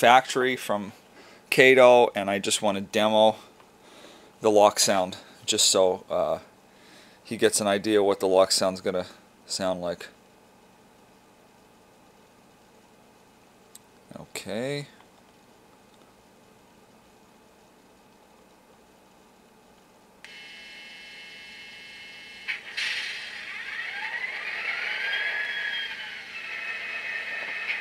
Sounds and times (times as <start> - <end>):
Sound effect: 22.5 - 27.8.